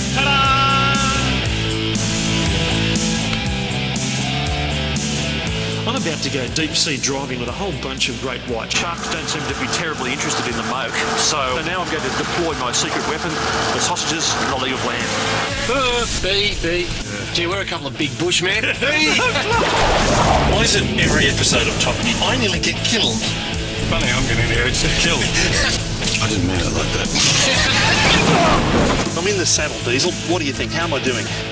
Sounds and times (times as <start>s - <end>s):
Music: 0.0s - 31.5s
Speech: 5.8s - 31.5s
Vehicle: 8.5s - 16.2s.